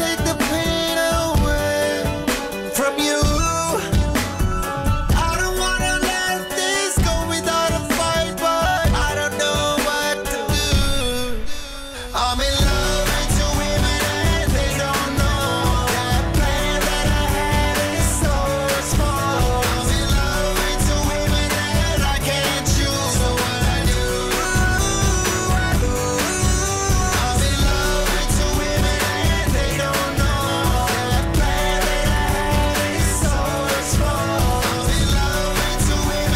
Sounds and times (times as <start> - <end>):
Happy music: 0.0 - 36.3
Pop music: 0.0 - 36.3.